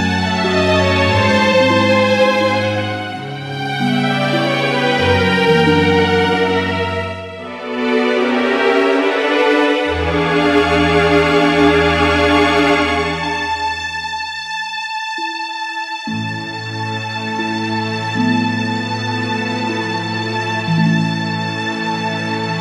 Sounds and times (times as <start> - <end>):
Music: 0.0 - 22.6.